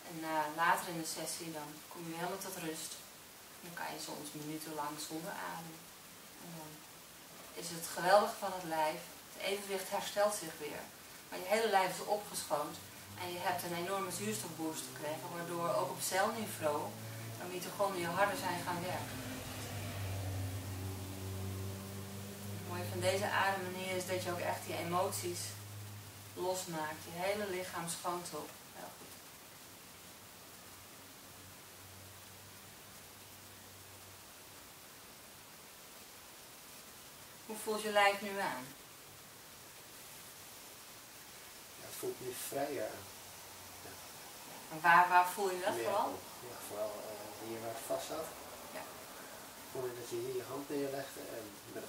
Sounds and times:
Speech: 0.1 - 3.0, 7.6 - 19.0, 22.7 - 25.6, 26.4 - 29.0, 37.5 - 38.8, 44.7 - 48.3, 49.8 - 51.8.

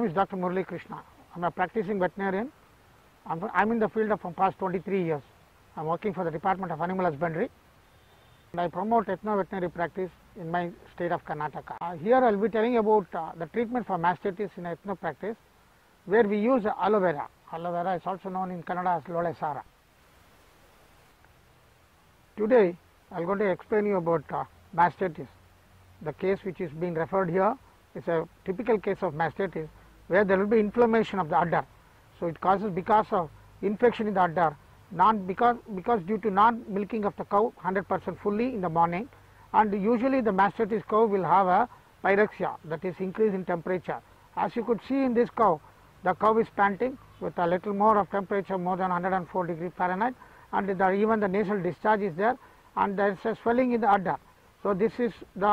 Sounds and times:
Speech: 0.0 - 2.5, 3.2 - 7.5, 8.5 - 15.4, 16.1 - 19.7, 22.4 - 25.4, 26.0 - 55.5.

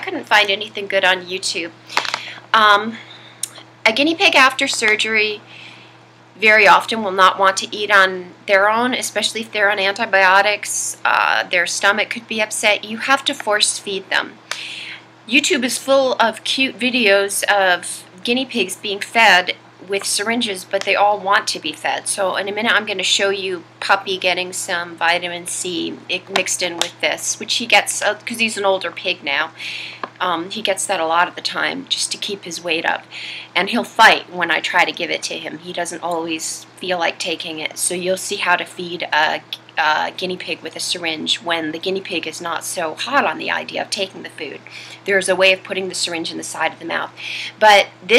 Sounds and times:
Speech: 0.0 - 1.8, 2.5 - 5.4, 6.4 - 14.4, 15.3 - 29.6, 30.2 - 48.1.

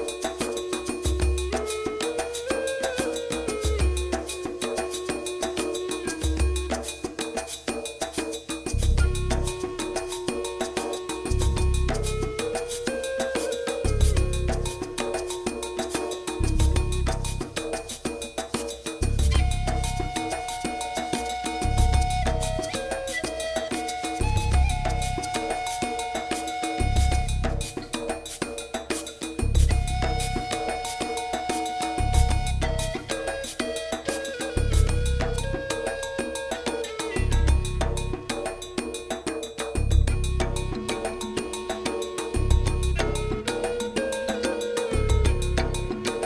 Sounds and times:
Music: 0.0 - 46.2.

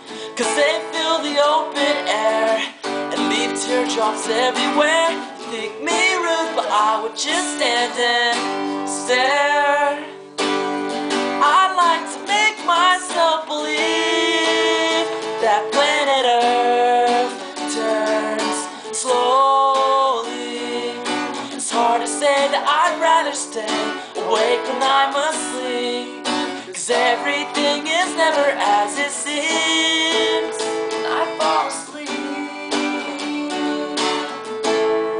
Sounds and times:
Music: 0.0 - 35.1.

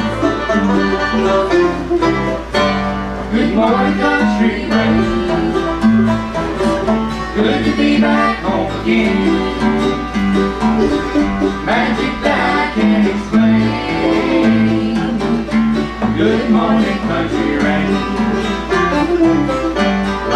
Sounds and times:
Music: 0.0 - 20.3.

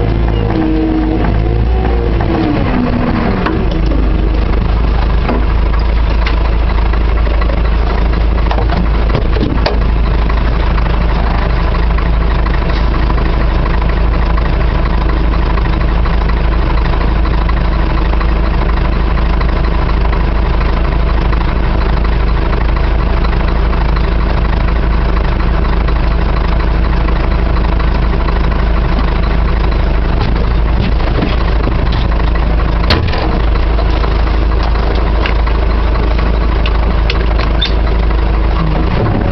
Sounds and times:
Vehicle: 0.0 - 39.3.

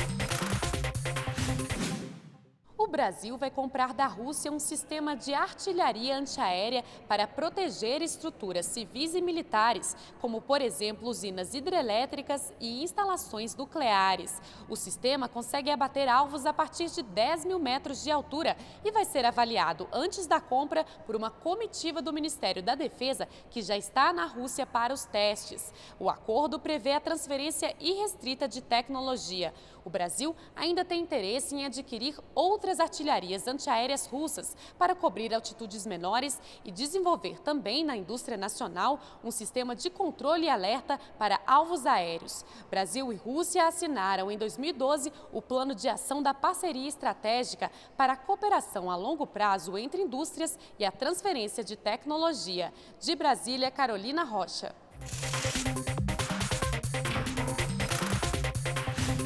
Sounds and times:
Speech: 2.8 - 54.8.

